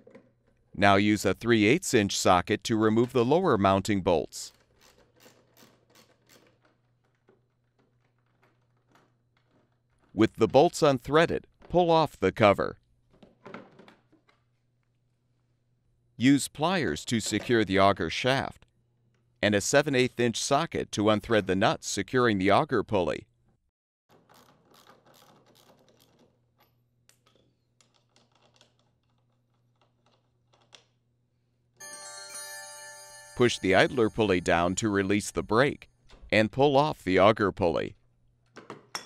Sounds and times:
Music: 31.8 - 35.4.

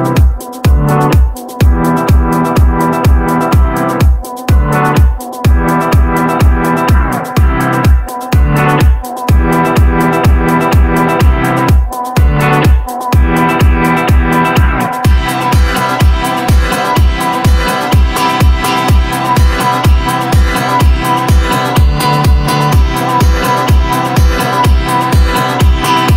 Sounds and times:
Music: 0.0 - 26.1.

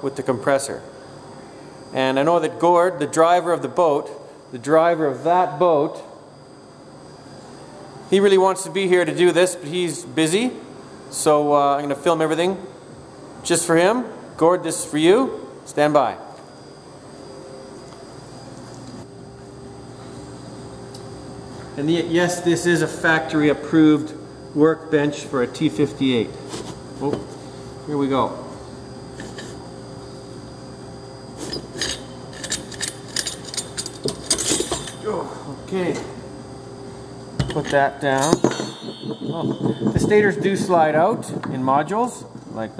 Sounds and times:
Speech: 2.0 - 6.1, 13.5 - 16.3, 21.8 - 26.3, 35.1 - 36.2, 39.3 - 42.7.

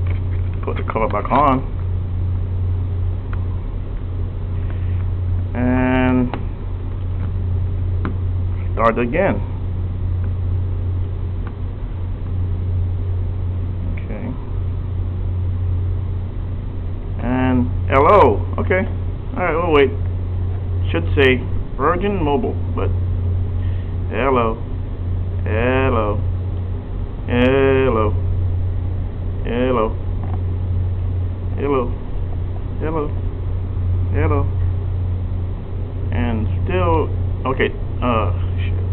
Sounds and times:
Speech: 0.6 - 1.7, 5.6 - 6.4, 8.8 - 9.5, 13.9 - 14.4, 17.2 - 20.0, 20.8 - 23.0, 24.1 - 24.6, 25.4 - 26.3, 27.3 - 28.2, 29.4 - 30.0, 31.6 - 32.0, 32.8 - 33.2, 34.1 - 34.6, 36.1 - 38.8.

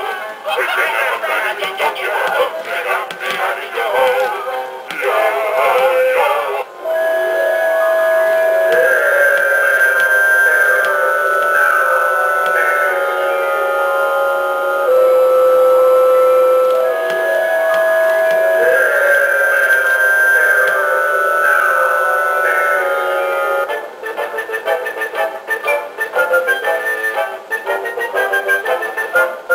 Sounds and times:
Music: 0.0 - 29.5.

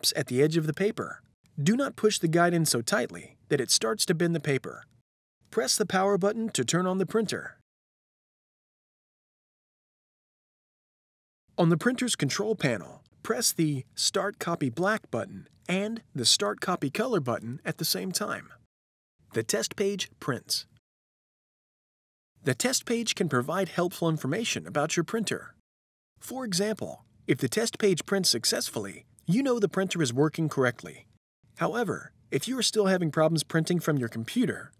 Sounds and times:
Speech: 0.0 - 4.9, 5.5 - 7.6, 11.6 - 18.6, 19.3 - 20.8, 22.4 - 25.6, 26.2 - 34.7.

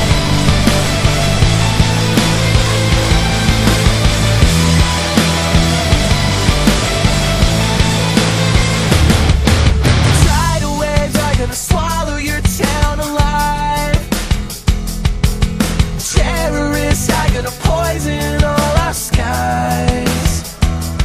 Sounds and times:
Video game music: 0.0 - 11.2
Pop music: 0.0 - 21.0.

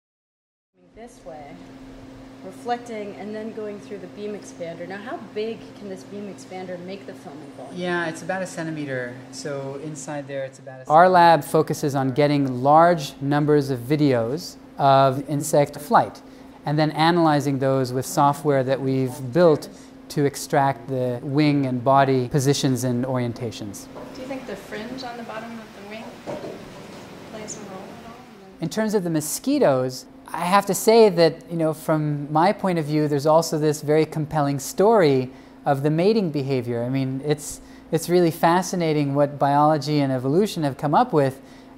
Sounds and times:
Speech: 8.8 - 26.1, 27.5 - 41.4.

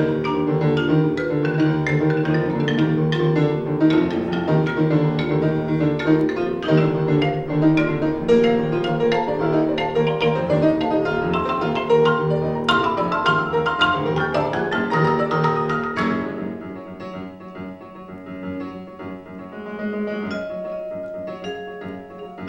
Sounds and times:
Tubular bells: 0.0 - 16.6, 20.2 - 22.4.

